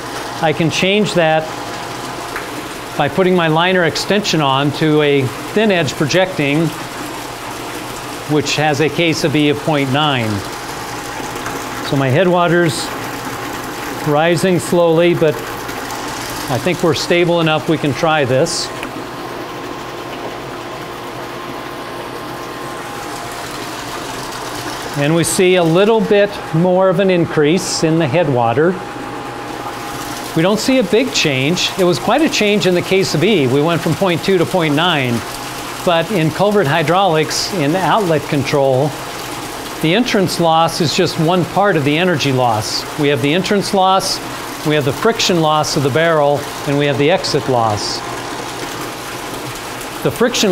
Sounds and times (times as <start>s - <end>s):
Pump (liquid): 0.0s - 50.5s
Speech: 0.4s - 1.5s, 3.0s - 6.8s, 8.3s - 10.5s, 11.8s - 13.0s, 14.0s - 15.4s, 16.5s - 18.8s, 25.0s - 28.8s, 30.4s - 39.0s, 39.8s - 48.1s, 50.0s - 50.5s.